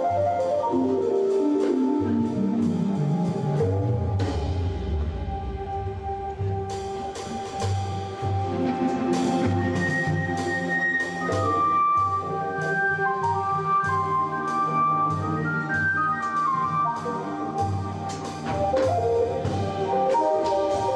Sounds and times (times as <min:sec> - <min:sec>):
Music: 0:00.0 - 0:20.9.